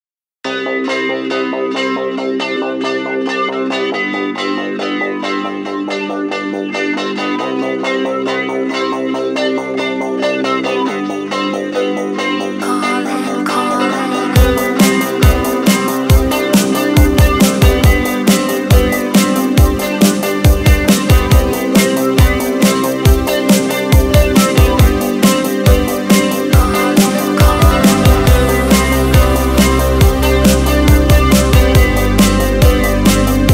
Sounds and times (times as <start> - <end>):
Music: 0.4 - 33.5.